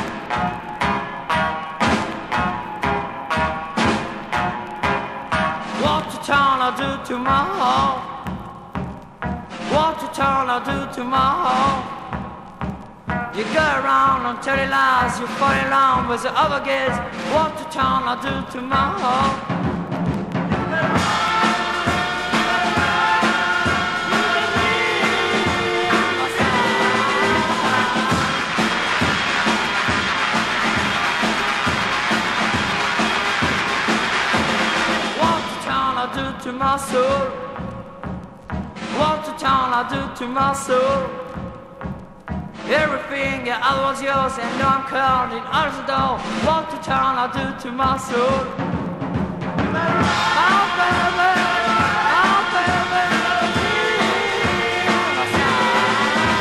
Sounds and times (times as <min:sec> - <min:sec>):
Music: 0:00.0 - 0:56.4.